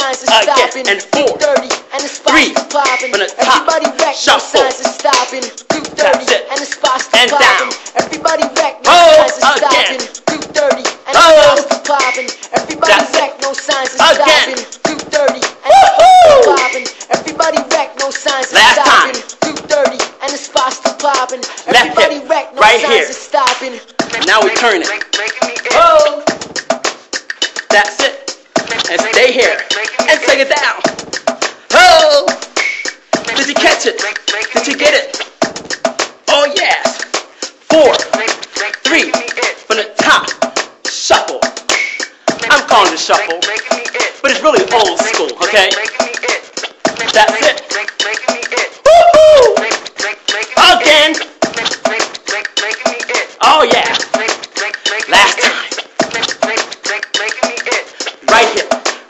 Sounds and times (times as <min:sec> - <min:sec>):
Music: 0:00.0 - 0:59.1
Speech: 0:21.7 - 0:24.9, 0:25.7 - 0:26.3, 0:28.9 - 0:30.8, 0:31.7 - 0:32.4, 0:33.4 - 0:34.0, 0:34.6 - 0:35.1, 0:36.3 - 0:37.0, 0:37.7 - 0:38.1, 0:38.8 - 0:41.5, 0:42.4 - 0:43.5, 0:44.2 - 0:45.8, 0:47.1 - 0:47.6, 0:50.6 - 0:51.2, 0:53.4 - 0:54.0, 0:55.1 - 0:55.5, 0:58.2 - 0:58.7.